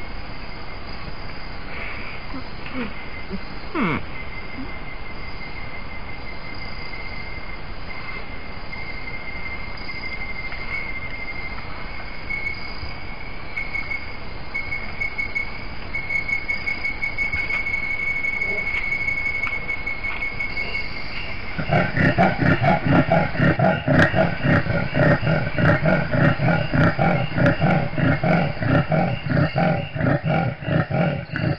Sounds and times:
Roaring cats (lions, tigers): 21.6s - 31.5s.

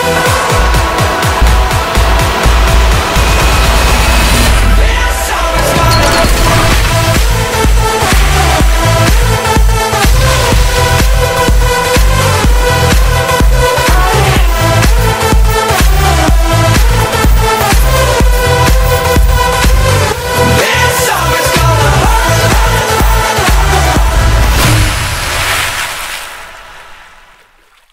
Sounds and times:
Music: 0.0s - 25.0s.

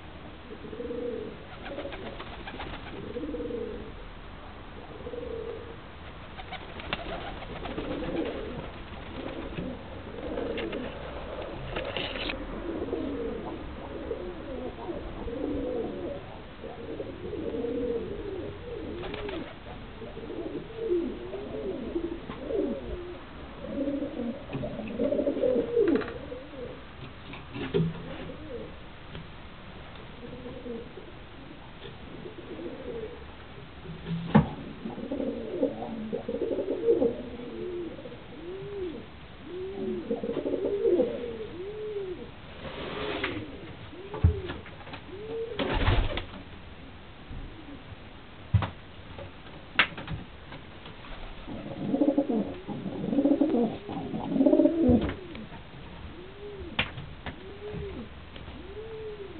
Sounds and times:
Pigeon, dove: 0.5s - 3.9s, 5.0s - 28.8s, 33.9s - 46.4s, 51.1s - 59.3s.

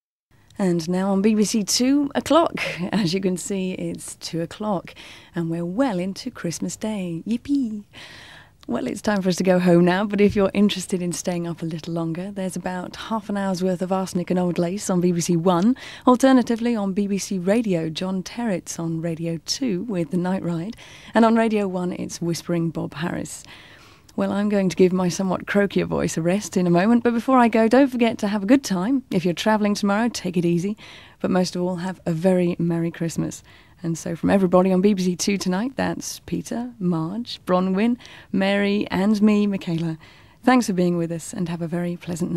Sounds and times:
Speech: 0.6s - 7.9s, 8.6s - 23.4s, 24.2s - 42.3s.

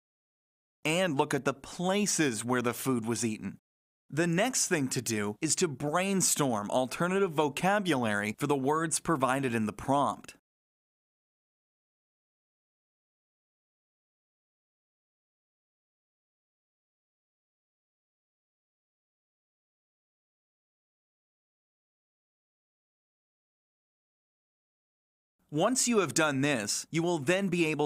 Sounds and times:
Speech: 0.9s - 10.4s, 25.5s - 27.8s.

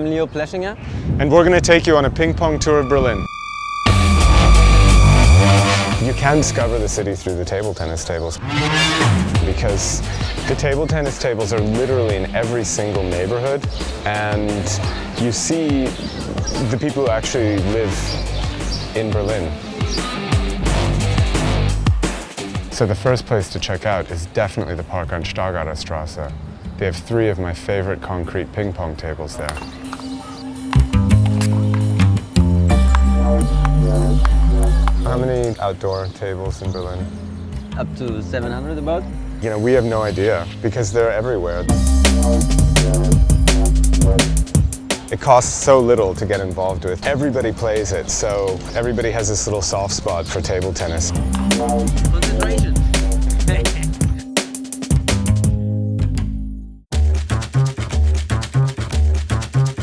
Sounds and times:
Speech: 0.0s - 3.3s, 6.0s - 8.4s, 9.4s - 18.2s, 18.9s - 19.6s, 22.7s - 29.6s, 34.6s - 37.1s, 37.8s - 41.7s, 45.1s - 51.2s, 51.9s - 54.3s
Music: 1.6s - 59.8s.

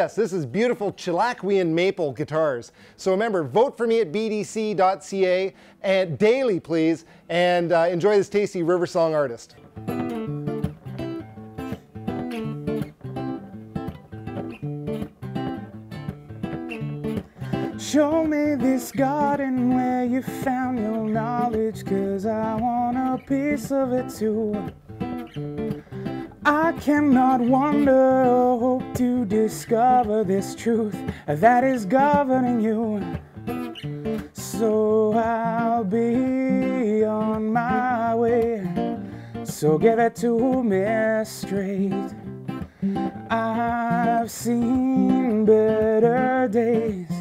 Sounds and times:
Acoustic guitar: 0.0s - 47.2s
Strum: 9.6s - 47.2s.

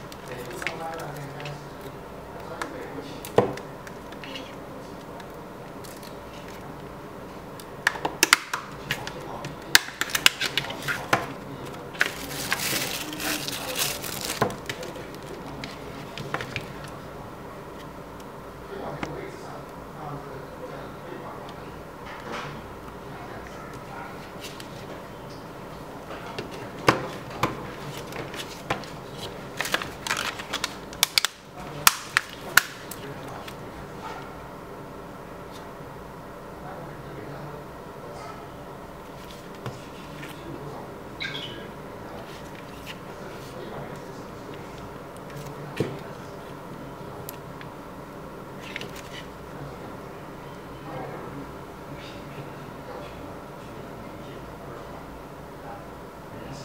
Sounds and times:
Speech: 0.3s - 3.4s, 8.8s - 16.9s, 18.6s - 24.3s, 31.5s - 34.3s, 36.6s - 38.8s, 39.6s - 47.4s, 49.5s - 56.6s.

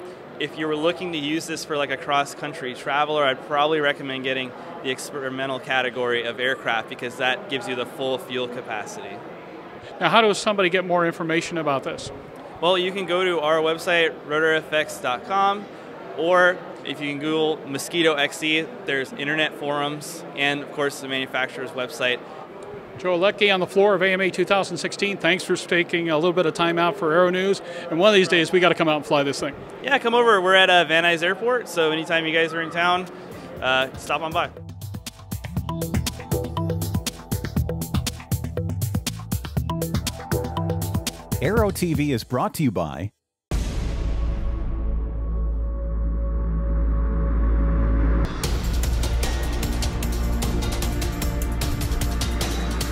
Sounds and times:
Speech: 0.4s - 9.2s, 10.0s - 22.2s, 23.0s - 34.5s, 41.4s - 43.2s
Music: 33.6s - 42.3s, 44.0s - 52.9s.

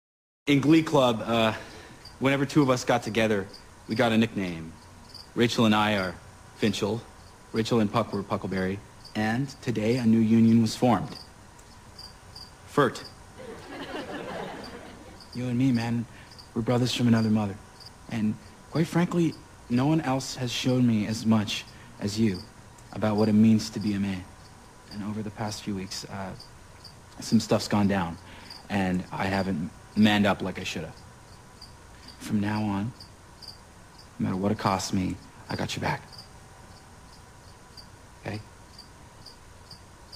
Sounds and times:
Male speech, man speaking: 0.5s - 1.6s, 2.2s - 4.8s, 5.4s - 11.2s, 12.7s - 13.1s, 15.4s - 24.3s, 24.9s - 26.4s, 27.2s - 31.0s, 32.2s - 33.0s, 34.2s - 36.1s, 38.2s - 38.5s.

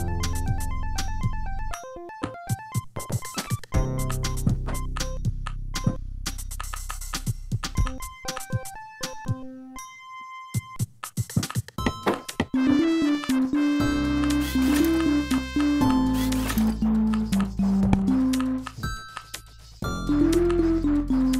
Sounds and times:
Music: 0.0s - 21.3s.

